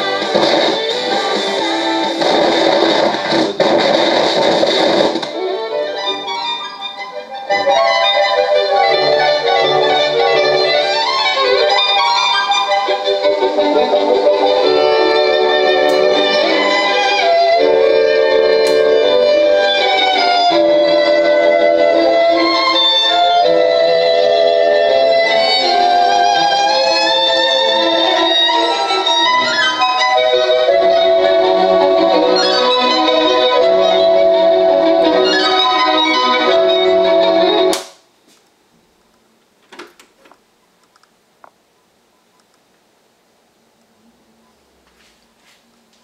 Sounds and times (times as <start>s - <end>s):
Music: 0.0s - 37.9s.